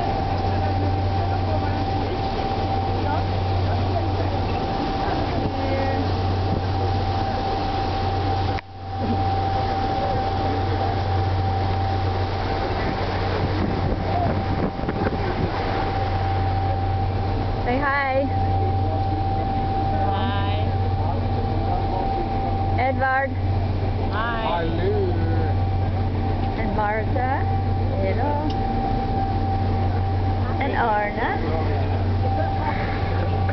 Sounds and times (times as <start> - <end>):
Vehicle: 0.0 - 33.5.